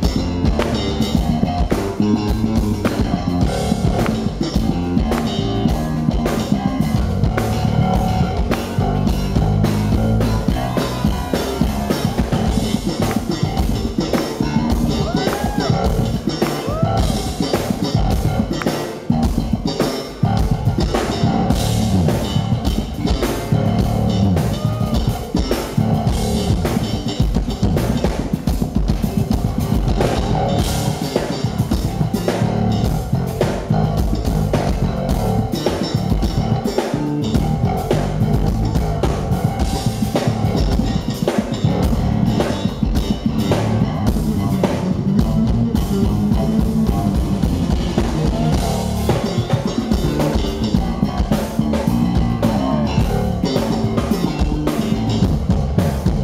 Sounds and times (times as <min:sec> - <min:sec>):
Music: 0:00.0 - 0:56.2.